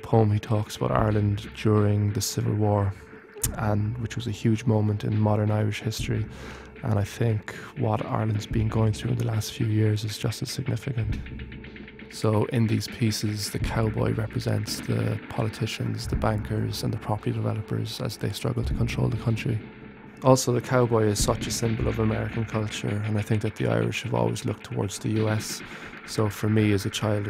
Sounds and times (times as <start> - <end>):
Speech: 0.0 - 11.2, 12.1 - 19.6, 20.2 - 27.2.